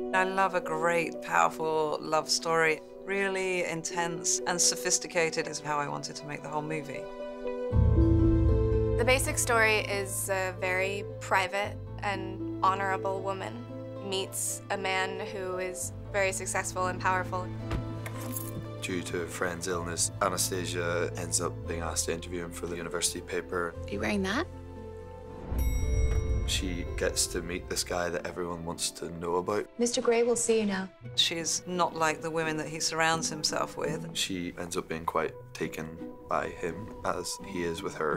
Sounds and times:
Music: 0.0s - 38.1s.

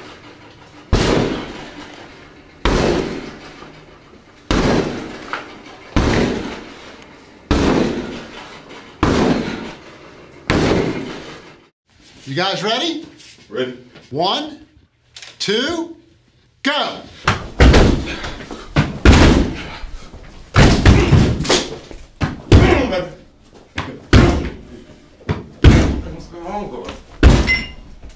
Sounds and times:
Speech: 12.2s - 14.8s, 15.4s - 17.1s, 22.5s - 23.2s, 26.0s - 27.0s.

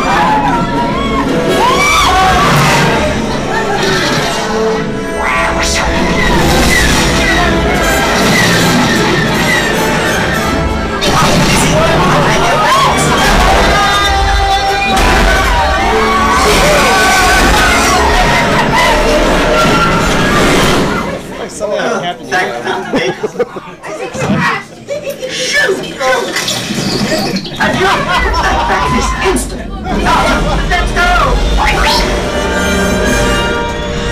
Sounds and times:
Yell: 0.0s - 3.8s, 11.0s - 21.2s
Music: 0.0s - 21.4s, 26.4s - 34.1s.

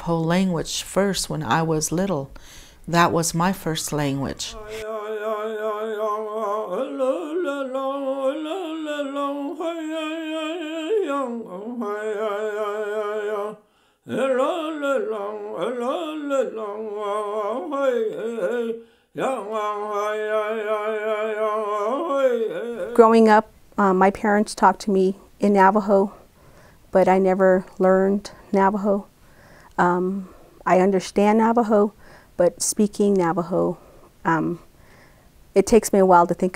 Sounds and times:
Speech: 0.0s - 2.3s, 2.9s - 4.7s, 23.0s - 26.2s, 27.0s - 29.1s, 29.8s - 34.6s, 35.6s - 36.5s
Inside, small room: 0.0s - 36.5s.

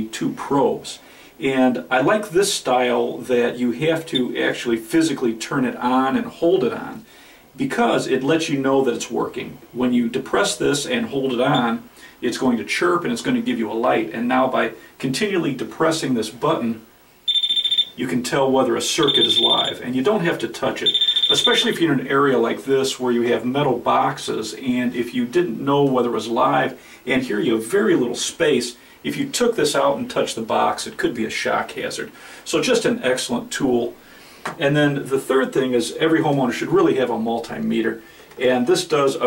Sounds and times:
Speech: 0.0s - 16.9s, 18.0s - 39.2s
Inside, small room: 0.0s - 39.2s.

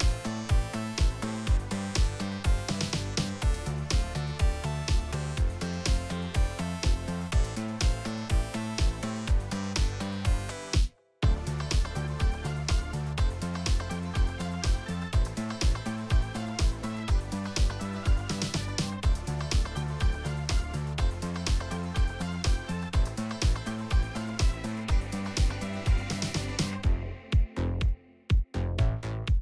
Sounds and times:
Music: 0.0s - 29.4s.

